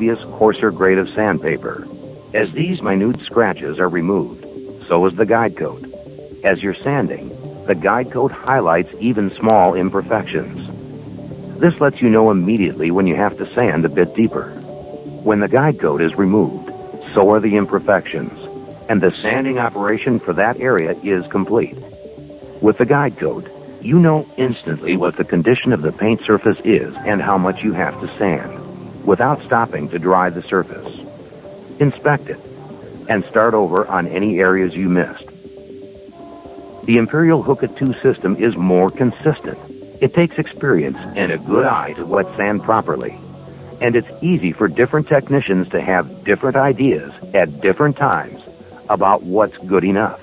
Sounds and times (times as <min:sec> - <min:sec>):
Speech: 0:00.0 - 0:10.7, 0:11.6 - 0:14.6, 0:15.2 - 0:21.8, 0:22.6 - 0:31.1, 0:31.8 - 0:32.4, 0:33.1 - 0:35.3, 0:36.9 - 0:43.2, 0:43.8 - 0:50.2
Music: 0:00.0 - 0:50.2.